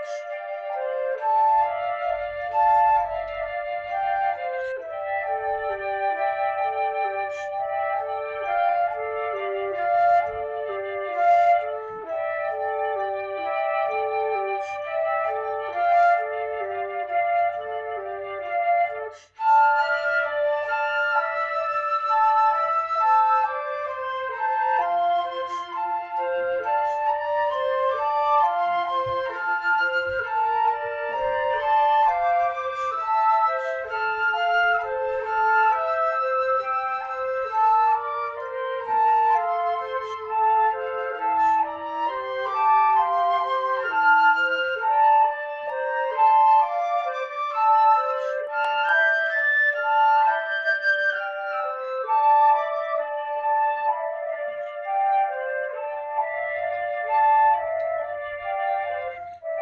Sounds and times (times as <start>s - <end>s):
Flute: 0.0s - 59.6s.